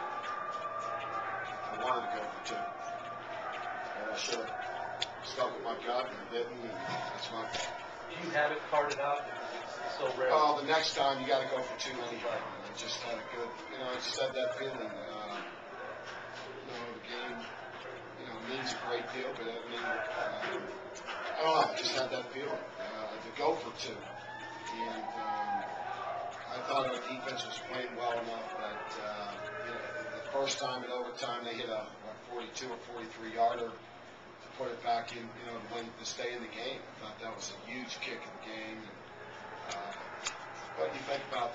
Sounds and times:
Speech: 1.6s - 2.8s, 4.0s - 4.6s, 5.2s - 15.5s, 16.6s - 17.5s, 18.2s - 24.1s, 24.7s - 25.6s, 26.4s - 33.8s, 34.5s - 39.0s, 40.7s - 41.5s.

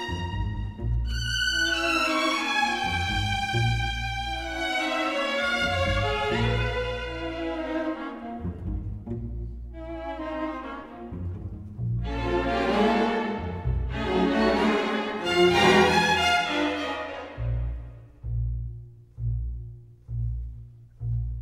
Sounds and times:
Cello: 0.0s - 21.4s.

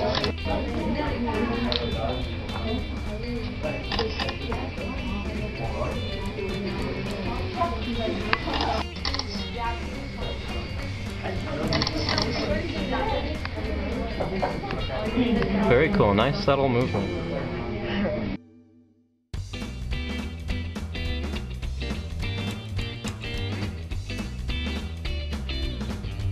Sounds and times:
Speech: 0.0s - 18.4s
Music: 0.0s - 26.3s.

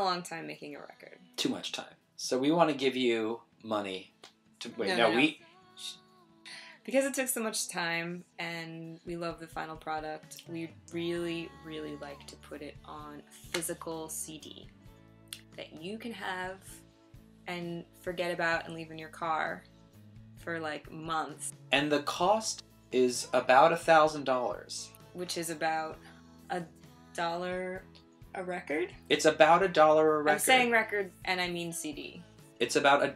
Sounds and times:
Music: 0.0s - 33.1s.

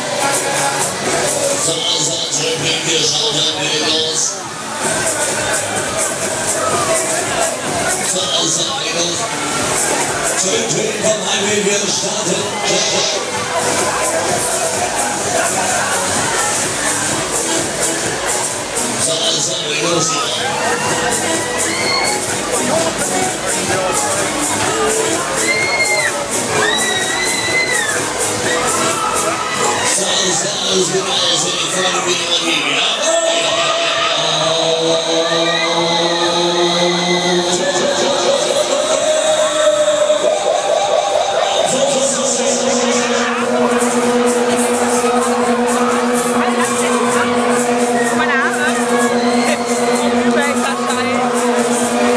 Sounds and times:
Speech: 0.0s - 26.3s, 28.6s - 52.1s
Music: 0.0s - 52.1s.

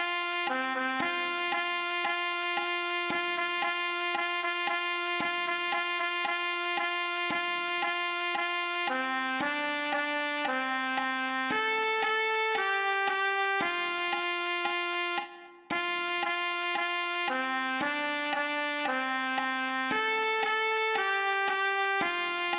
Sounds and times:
Trumpet: 0.0s - 22.5s.

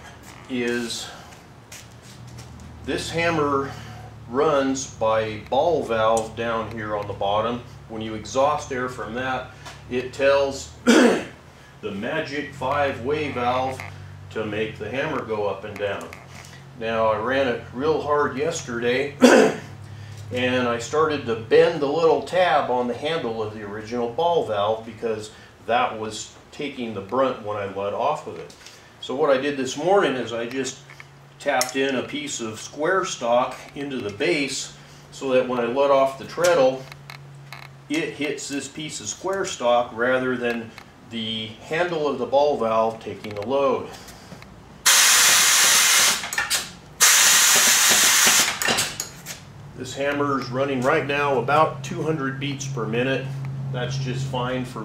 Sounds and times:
Speech: 0.5s - 1.2s, 2.9s - 16.2s, 16.8s - 19.3s, 20.3s - 30.8s, 31.4s - 36.8s, 37.9s - 44.0s, 49.8s - 54.8s.

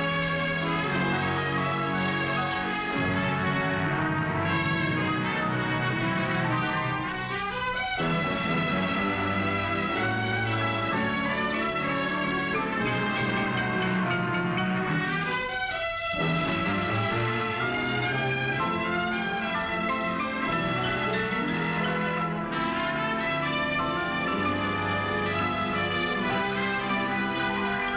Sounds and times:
Music: 0.0s - 27.9s.

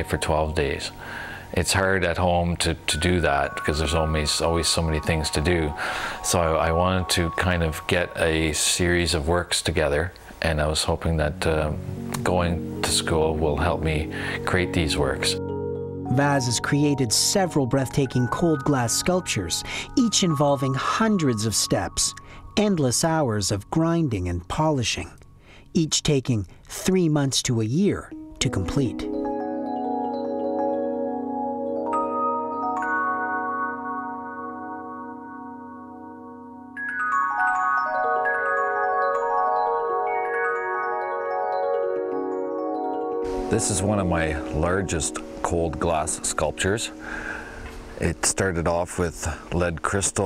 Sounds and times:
Glockenspiel: 0.0s - 8.8s, 12.0s - 25.6s, 28.1s - 48.4s
Marimba, xylophone: 2.9s - 8.2s, 12.0s - 23.8s, 28.1s - 47.9s.

